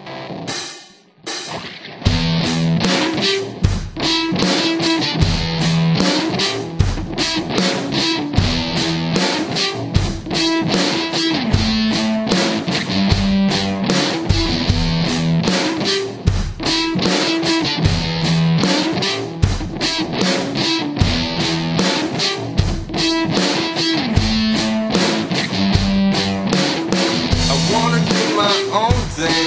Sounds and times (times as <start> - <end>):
Progressive rock: 0.0 - 29.4.